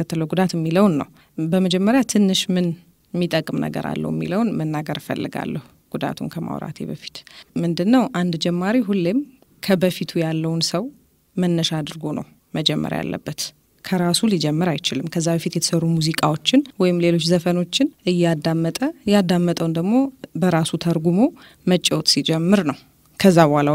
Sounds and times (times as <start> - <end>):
Speech: 0.0 - 23.7.